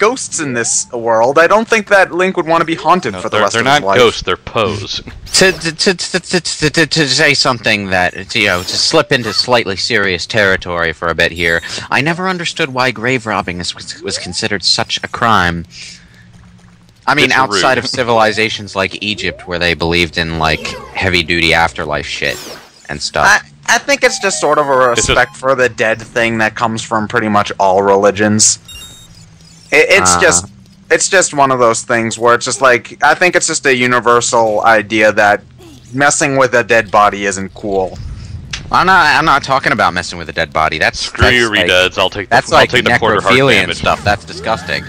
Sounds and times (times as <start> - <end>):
Speech: 0.0 - 16.0, 17.0 - 28.6, 29.7 - 38.0, 38.7 - 44.8.